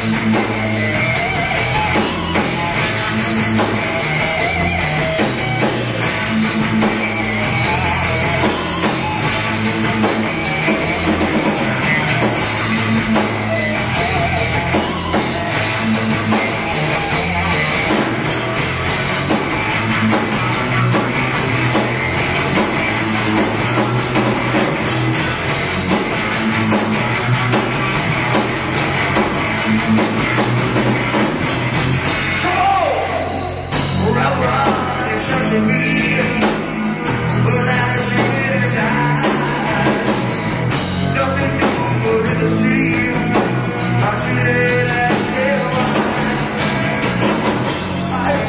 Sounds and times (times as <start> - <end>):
Heavy metal: 0.0 - 48.4.